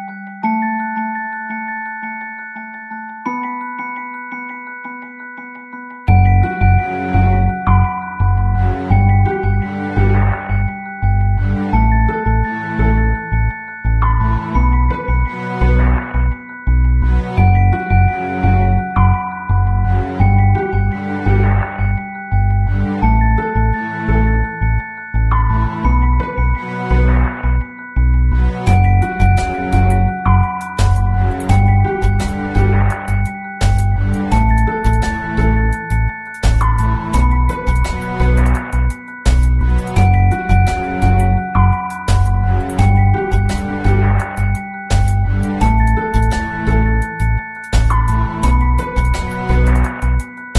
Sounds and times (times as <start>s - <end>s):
Music: 0.0s - 50.5s.